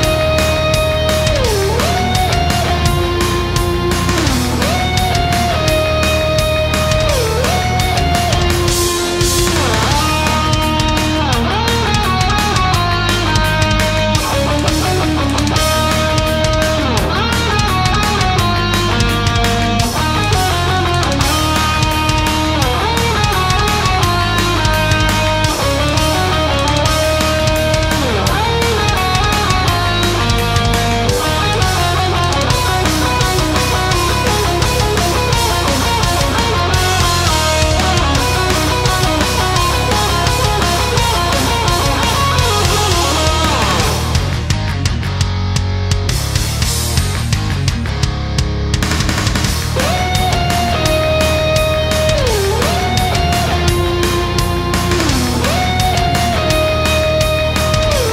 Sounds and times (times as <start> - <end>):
Electric guitar: 0.0 - 58.1.